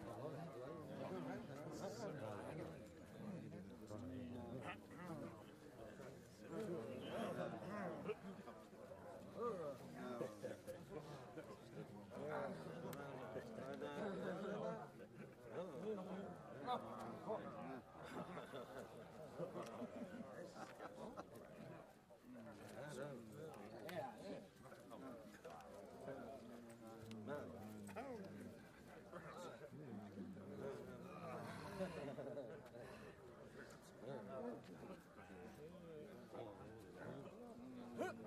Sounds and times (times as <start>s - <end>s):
Crowd: 0.0s - 38.2s
Speech: 0.0s - 38.2s.